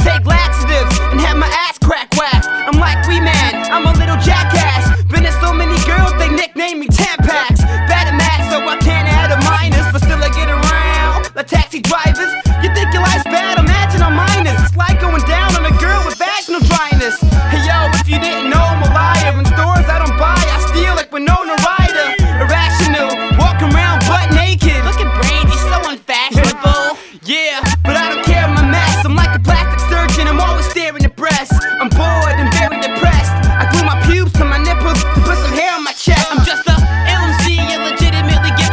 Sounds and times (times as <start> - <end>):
Hip hop music: 0.0 - 38.7
Rapping: 0.0 - 38.7.